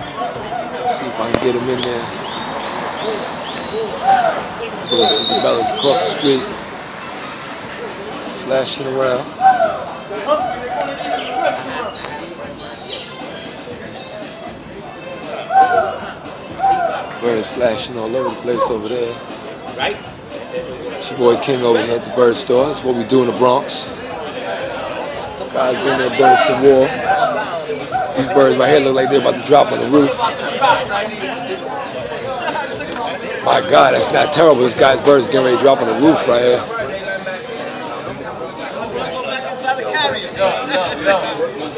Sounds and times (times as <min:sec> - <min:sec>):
Speech: 0:00.0 - 0:02.2, 0:04.6 - 0:06.6, 0:10.0 - 0:41.7
Music: 0:00.0 - 0:41.7.